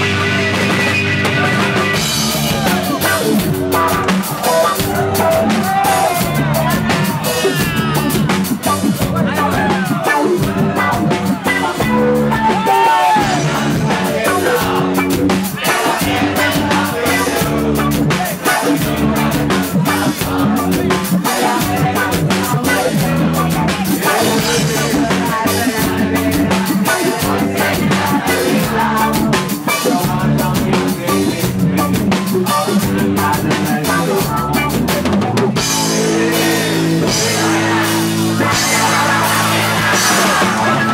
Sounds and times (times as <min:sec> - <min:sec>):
Music: 0:00.0 - 0:40.9.